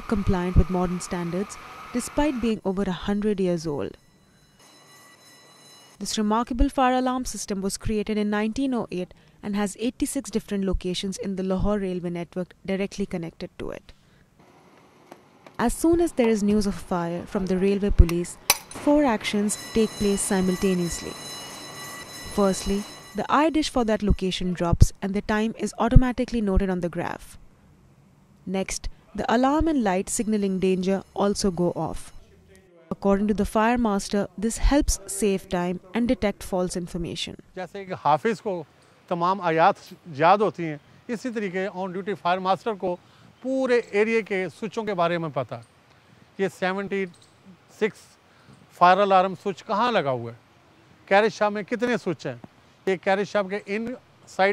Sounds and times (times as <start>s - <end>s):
Speech: 0.1s - 4.0s, 6.0s - 13.8s, 15.6s - 21.2s, 22.4s - 27.3s, 28.5s - 45.6s, 48.8s - 50.4s, 51.1s - 54.5s.